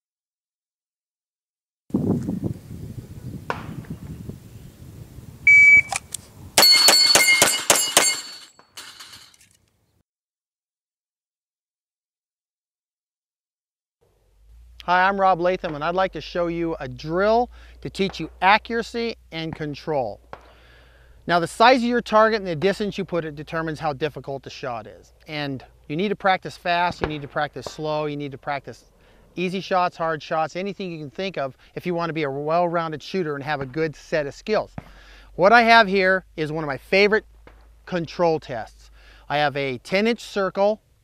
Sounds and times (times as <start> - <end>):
Speech: 14.8 - 20.2, 21.3 - 34.8, 35.4 - 37.2, 37.9 - 40.8.